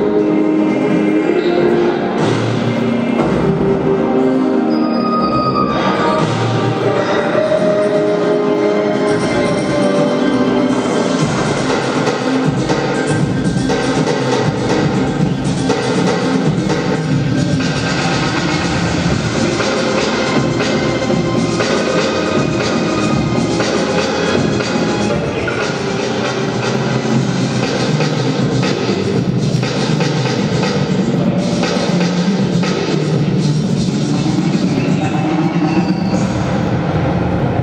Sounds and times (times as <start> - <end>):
Music: 0.0 - 37.6.